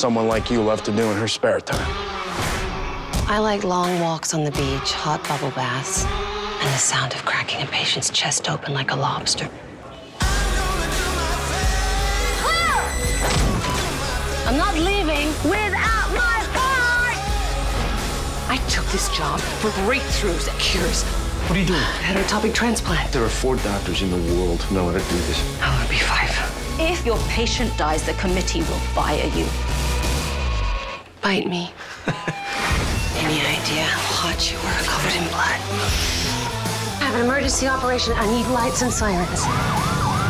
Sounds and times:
Music: 0.0 - 7.4, 10.0 - 31.2, 31.8 - 40.3.

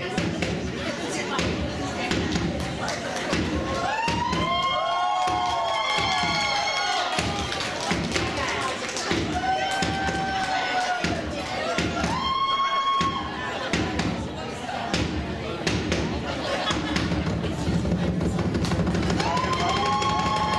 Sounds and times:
Speech: 0.0 - 4.1, 6.4 - 18.5.

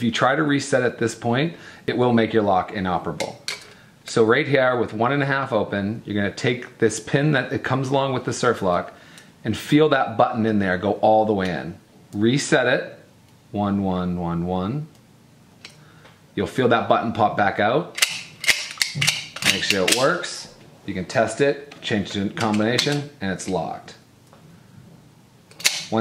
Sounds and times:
Speech: 0.0 - 3.5, 4.1 - 15.0, 16.4 - 18.0, 19.4 - 24.0.

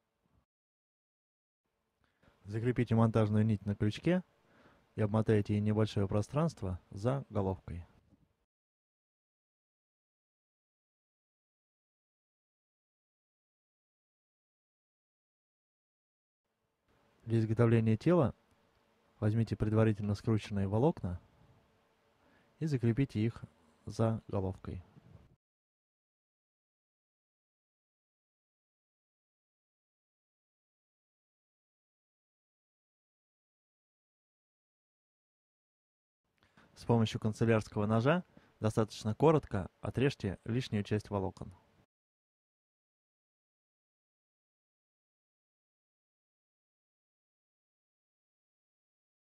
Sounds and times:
Speech: 2.4 - 4.3, 5.0 - 8.0, 17.2 - 18.4, 19.2 - 21.2, 22.6 - 24.9, 36.8 - 41.6.

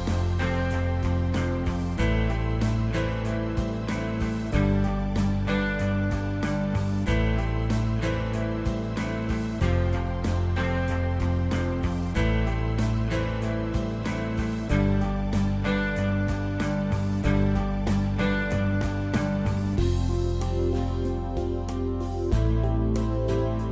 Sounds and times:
Music: 0.0 - 23.7.

